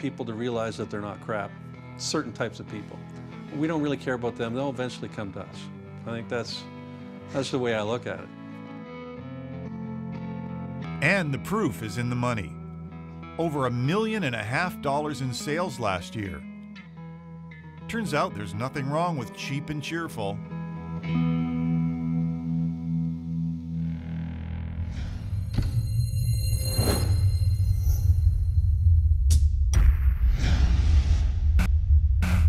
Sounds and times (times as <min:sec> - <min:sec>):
Electric guitar: 0:04.2 - 0:25.6.